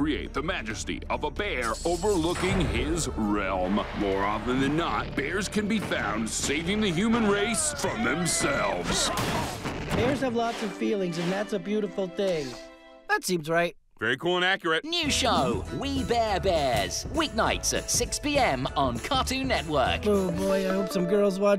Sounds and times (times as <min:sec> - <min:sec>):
Speech: 0:00.0 - 0:09.3, 0:10.0 - 0:21.5
Music: 0:00.0 - 0:13.5, 0:14.9 - 0:21.5.